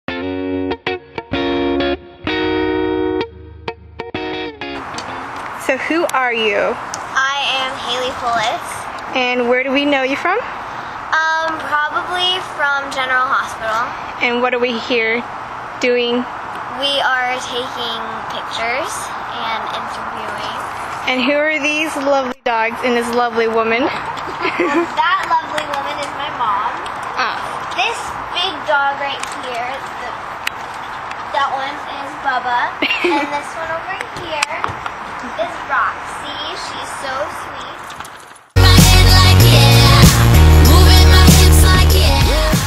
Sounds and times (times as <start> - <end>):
Music: 0.1 - 5.2, 38.6 - 42.6.